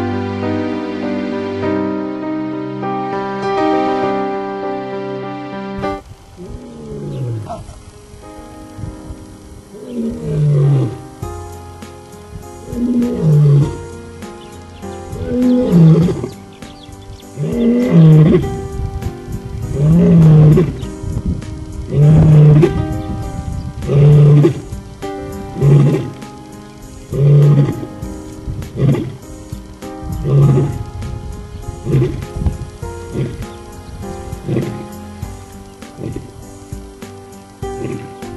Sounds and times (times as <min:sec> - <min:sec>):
Music: 0:00.0 - 0:38.3.